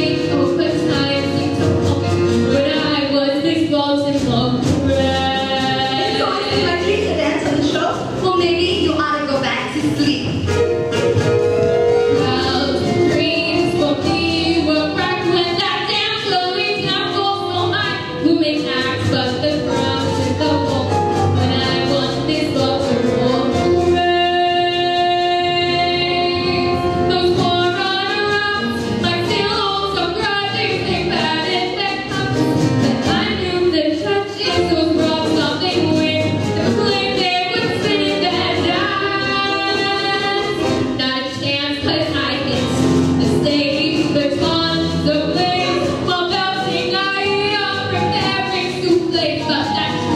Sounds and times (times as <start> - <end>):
Inside, large room or hall: 0.0 - 50.1
Music: 0.0 - 50.1.